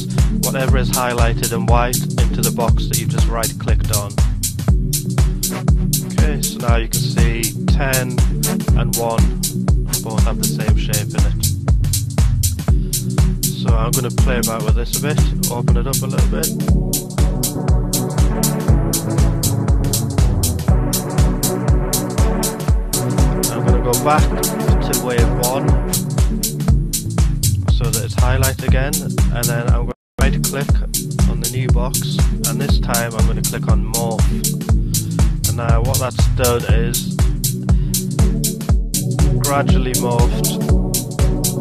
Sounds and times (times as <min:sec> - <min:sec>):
Music: 0:00.0 - 0:41.6
Speech: 0:00.4 - 0:04.2, 0:06.1 - 0:11.5, 0:13.6 - 0:16.5, 0:23.5 - 0:25.7, 0:27.7 - 0:34.4, 0:35.5 - 0:37.1, 0:39.4 - 0:40.7.